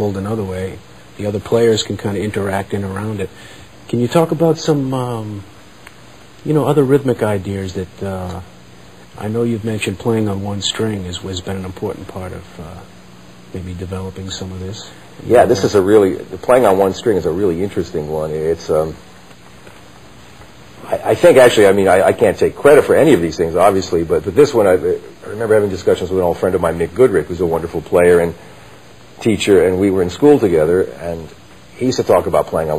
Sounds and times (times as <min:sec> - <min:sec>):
Speech: 0:00.0 - 0:05.5, 0:06.4 - 0:08.6, 0:09.2 - 0:19.1, 0:20.8 - 0:28.4, 0:29.2 - 0:32.7.